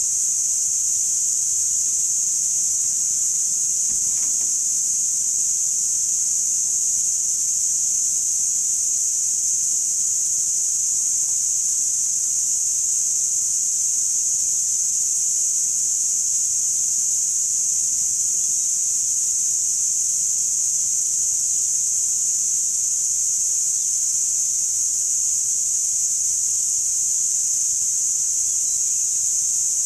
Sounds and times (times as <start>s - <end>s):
Snake: 0.0s - 6.5s.